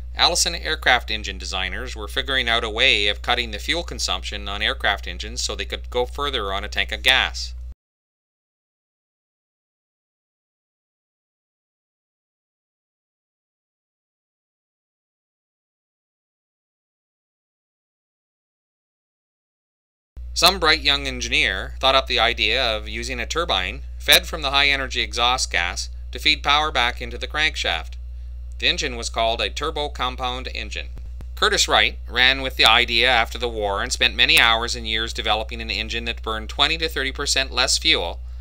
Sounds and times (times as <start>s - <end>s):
Speech: 0.2s - 7.6s, 20.4s - 28.0s, 28.6s - 38.2s.